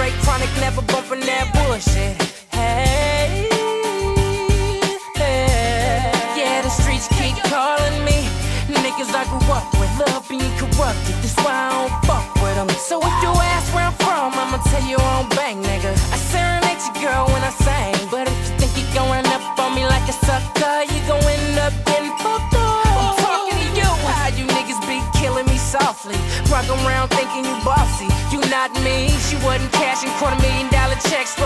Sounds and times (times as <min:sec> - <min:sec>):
Music: 0:00.0 - 0:31.4.